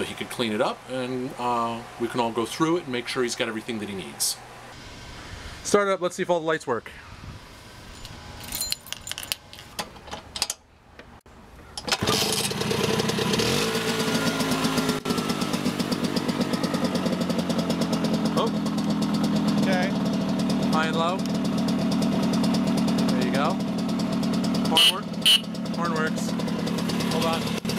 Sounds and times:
Speech: 0.0 - 4.4, 5.7 - 7.0, 18.4 - 18.6, 19.6 - 20.0, 20.7 - 21.2, 23.1 - 23.6, 24.7 - 25.1, 25.8 - 26.4, 27.1 - 27.5
Outside, urban or manmade: 0.0 - 27.7
Motorcycle: 11.8 - 27.7.

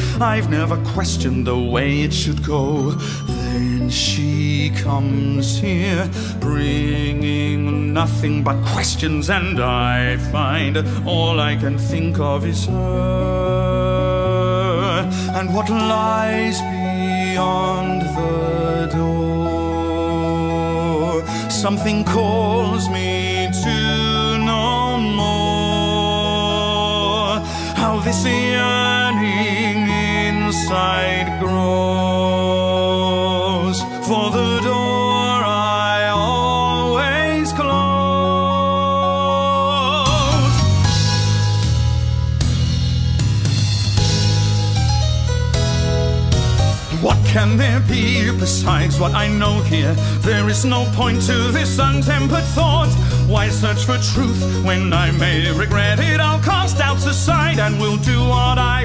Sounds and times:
Music: 0.0 - 58.8.

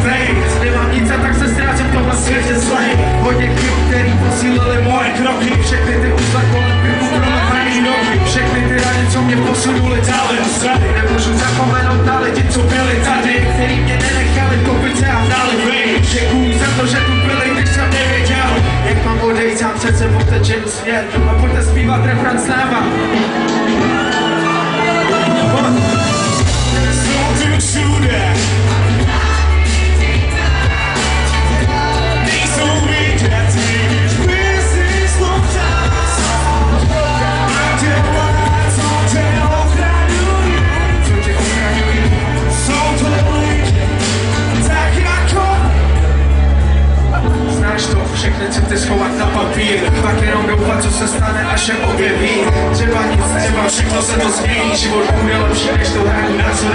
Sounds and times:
Music: 0.0 - 56.7.

